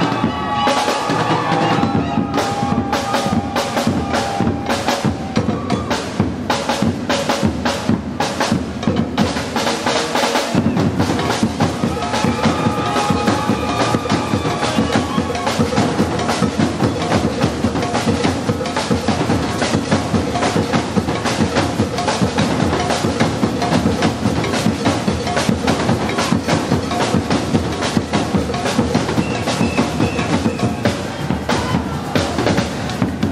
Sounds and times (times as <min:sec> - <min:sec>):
Percussion: 0:00.0 - 0:33.3.